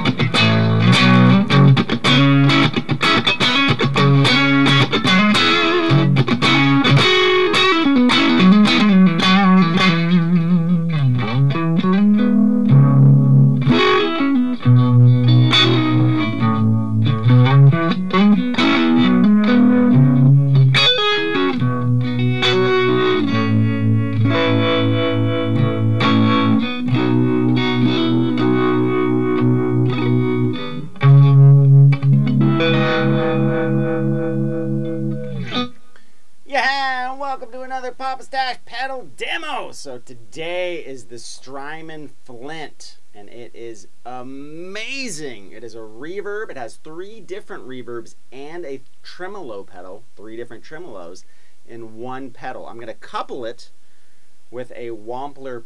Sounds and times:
Electric guitar: 0:00.0 - 0:36.2.

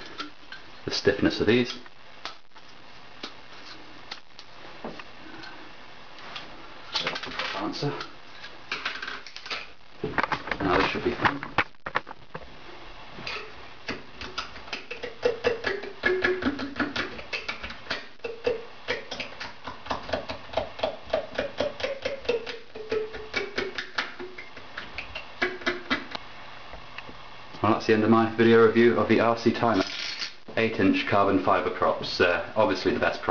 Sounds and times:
Inside, small room: 0:00.0 - 0:33.3
Speech: 0:00.8 - 0:01.8, 0:07.5 - 0:08.1, 0:10.6 - 0:11.4, 0:27.6 - 0:29.9, 0:30.5 - 0:33.3.

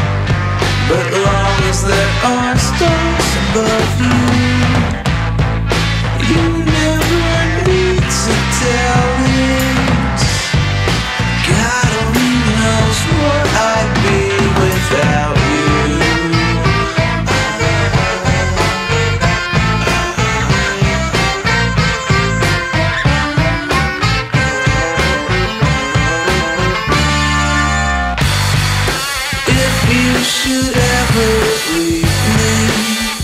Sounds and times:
Music: 0:00.0 - 0:33.2.

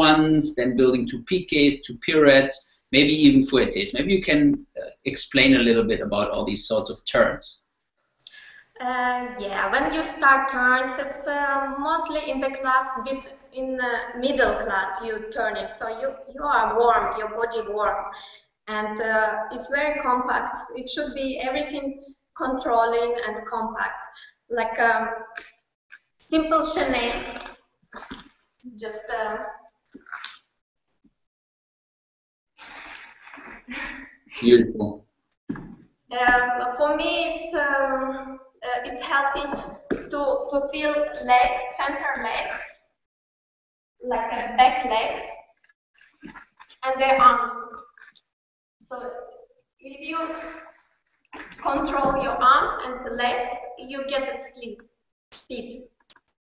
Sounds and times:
Speech: 0:00.0 - 0:07.6, 0:08.8 - 0:25.1, 0:26.3 - 0:29.4, 0:32.6 - 0:35.0, 0:35.6 - 0:42.7, 0:44.0 - 0:45.4, 0:46.3 - 0:47.8, 0:48.8 - 0:50.6, 0:51.4 - 0:54.8, 0:55.4 - 0:55.8.

